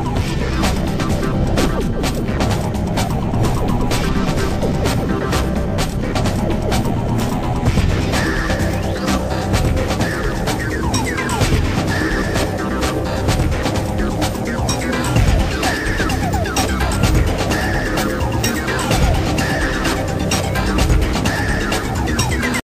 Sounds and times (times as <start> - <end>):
Theme music: 0.0 - 22.6.